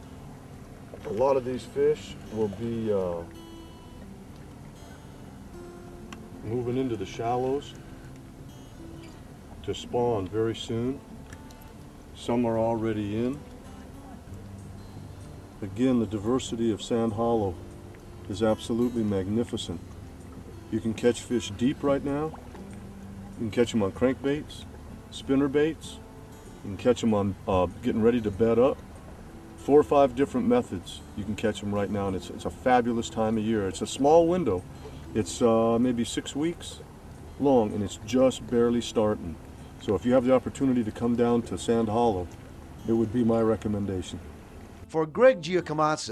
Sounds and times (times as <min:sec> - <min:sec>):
Music: 0:00.0 - 0:46.1
Outside, rural or natural: 0:00.0 - 0:46.1
Speech: 0:01.0 - 0:03.3, 0:06.4 - 0:07.8, 0:09.6 - 0:11.0, 0:12.2 - 0:13.4, 0:15.6 - 0:17.6, 0:18.3 - 0:19.8, 0:20.7 - 0:22.4, 0:23.4 - 0:26.0, 0:26.7 - 0:28.8, 0:29.6 - 0:34.6, 0:35.2 - 0:36.8, 0:37.4 - 0:42.3, 0:42.9 - 0:44.2, 0:44.9 - 0:46.1.